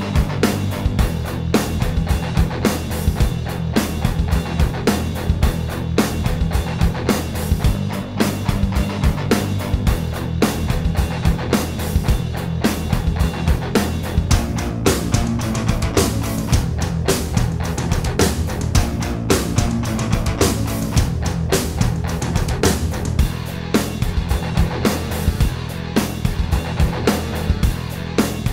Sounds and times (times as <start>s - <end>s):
Music: 0.0s - 28.5s.